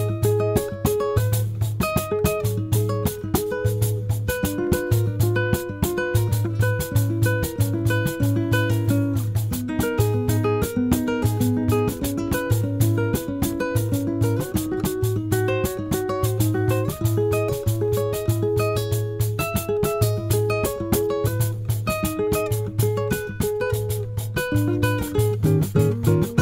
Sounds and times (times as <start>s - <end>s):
Music: 0.0s - 26.4s.